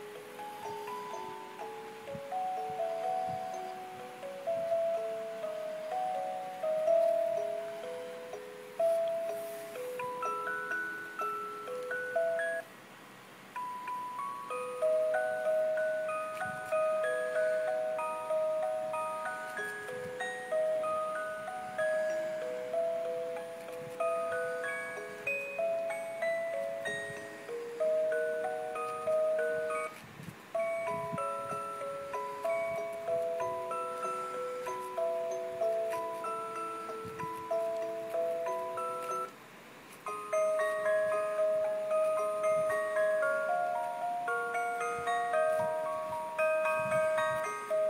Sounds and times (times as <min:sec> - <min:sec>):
Music: 0:00.0 - 0:12.7, 0:13.5 - 0:47.9.